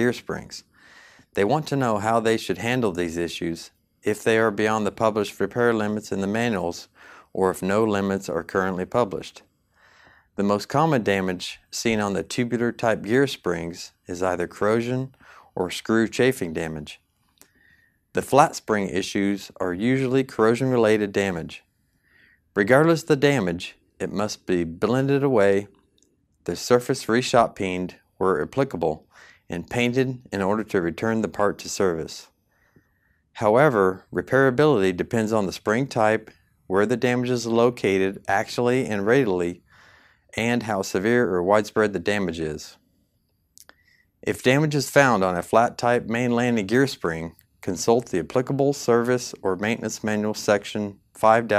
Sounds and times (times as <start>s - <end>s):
Speech: 0.0s - 0.7s, 1.3s - 9.5s, 10.4s - 17.0s, 18.1s - 21.7s, 22.6s - 25.8s, 26.4s - 32.3s, 33.4s - 39.6s, 40.3s - 42.8s, 43.6s - 51.5s.